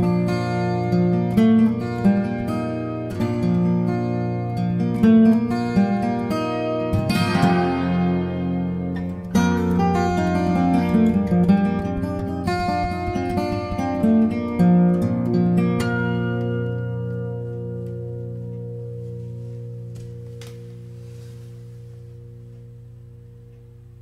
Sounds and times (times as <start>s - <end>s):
Acoustic guitar: 0.0s - 24.0s.